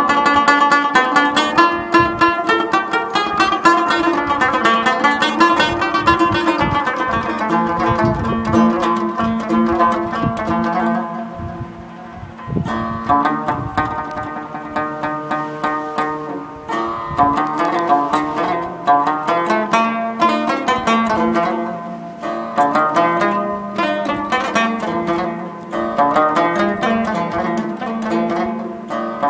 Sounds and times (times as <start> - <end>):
Music: 0.0 - 29.3.